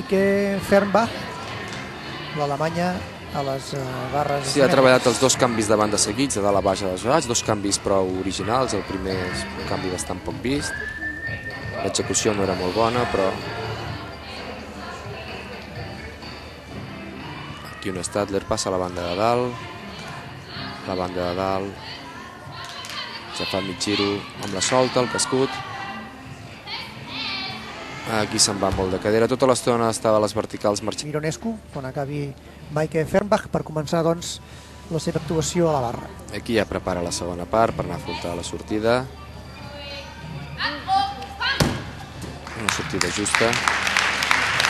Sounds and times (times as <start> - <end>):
Music: 0.0 - 44.6.